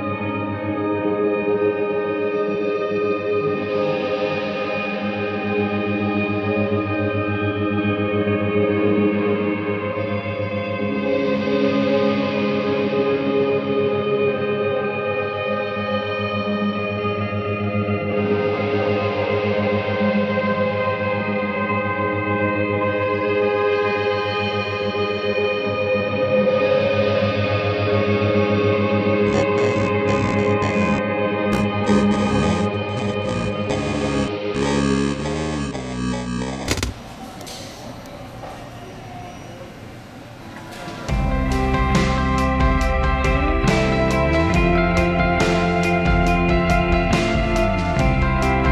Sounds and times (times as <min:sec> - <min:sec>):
Music: 0:00.0 - 0:36.9, 0:41.0 - 0:48.7.